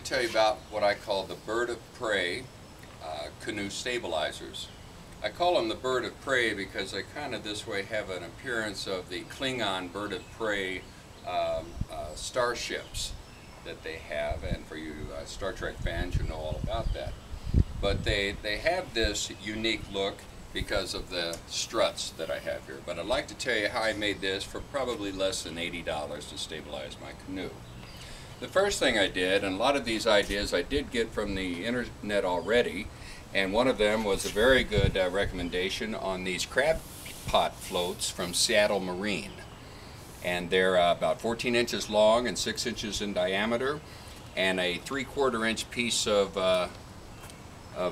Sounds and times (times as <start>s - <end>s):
Speech: 0.0s - 17.2s, 17.8s - 27.6s, 28.4s - 39.4s, 40.2s - 43.8s, 44.4s - 46.8s.